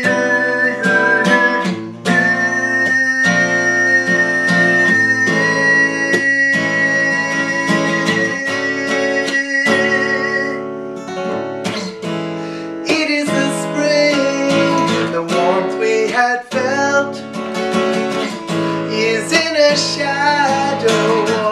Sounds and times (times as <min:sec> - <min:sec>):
Male singing: 0:00.0 - 0:10.6, 0:12.8 - 0:17.3, 0:18.9 - 0:21.5
Music: 0:00.0 - 0:21.5.